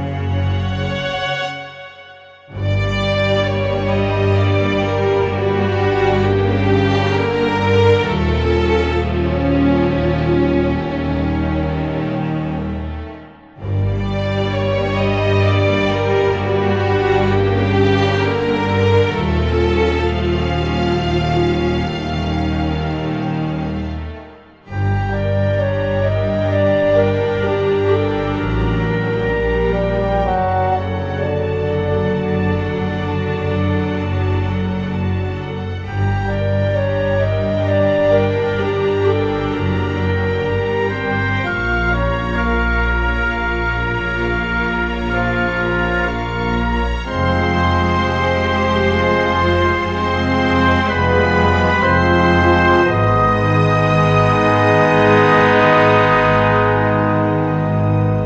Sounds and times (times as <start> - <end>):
Music: 0.0 - 58.2.